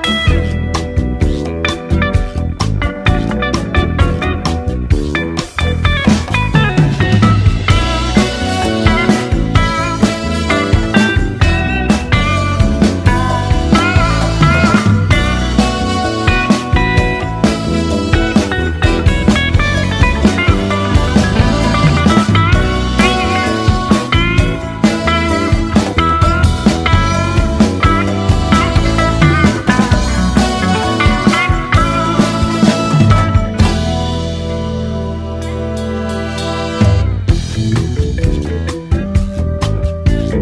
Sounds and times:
Psychedelic rock: 0.0s - 40.4s.

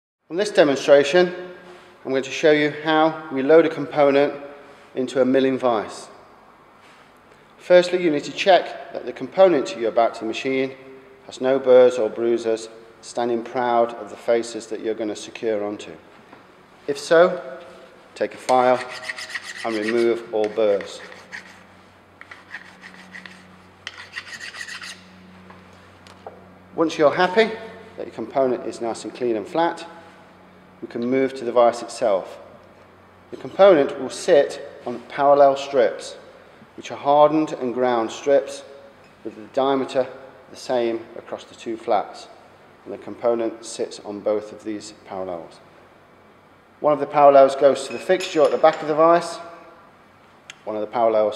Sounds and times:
Filing (rasp): 18.6s - 25.1s
Rub: 18.7s - 25.0s.

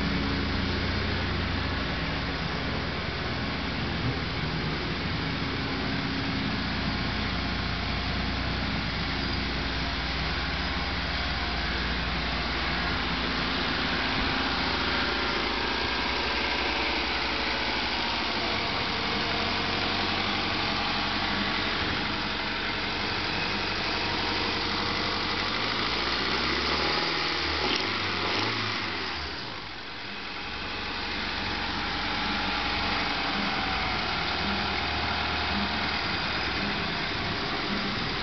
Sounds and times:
Car: 0.0s - 38.2s
Engine: 0.0s - 38.2s.

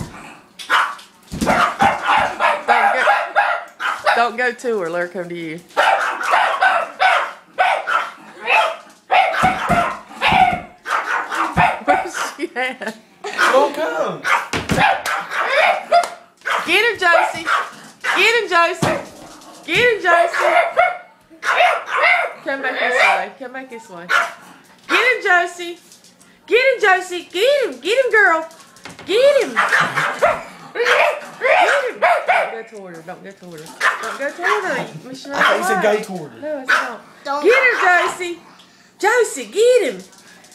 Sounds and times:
Yip: 0.7s - 4.2s, 5.8s - 12.3s, 14.2s - 16.7s, 20.3s - 23.3s, 24.1s - 24.4s, 29.6s - 32.6s, 33.8s - 34.8s.

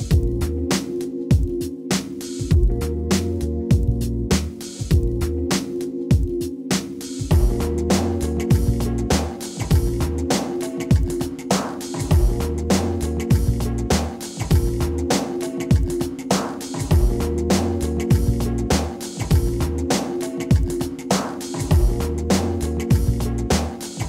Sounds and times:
Music: 0.0s - 24.0s.

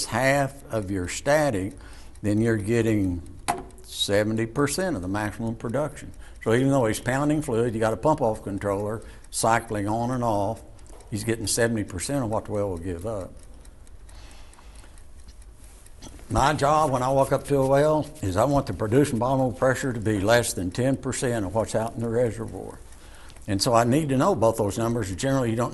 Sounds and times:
Speech: 0.0s - 3.2s, 3.9s - 13.4s, 16.3s - 22.8s, 23.5s - 25.7s.

